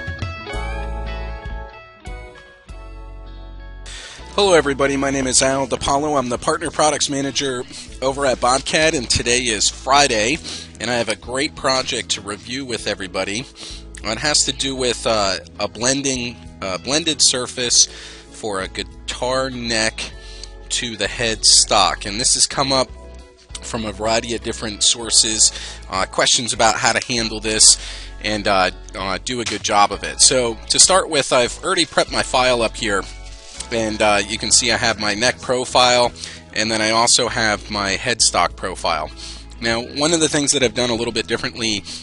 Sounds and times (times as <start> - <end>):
Speech: 4.4 - 22.9, 23.6 - 41.9.